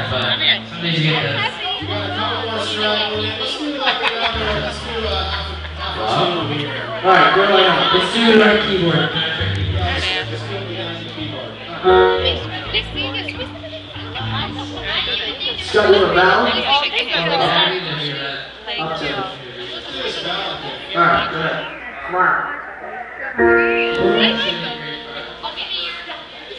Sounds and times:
Music: 0.0 - 3.6, 4.3 - 7.0, 9.3 - 16.8, 23.4 - 25.7
Hubbub, speech noise, speech babble: 0.0 - 26.5
Speech: 0.0 - 26.5.

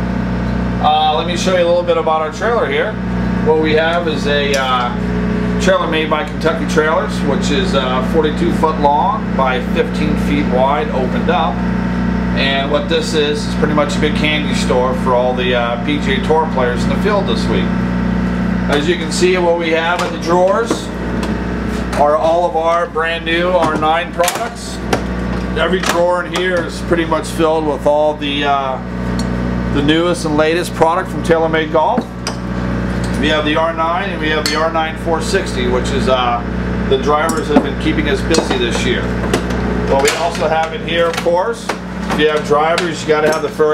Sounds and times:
Speech: 0.8 - 5.0, 5.6 - 11.6, 12.4 - 17.7, 18.7 - 20.9, 22.0 - 24.8, 25.6 - 28.8, 29.7 - 32.1, 33.2 - 39.1, 39.9 - 43.7.

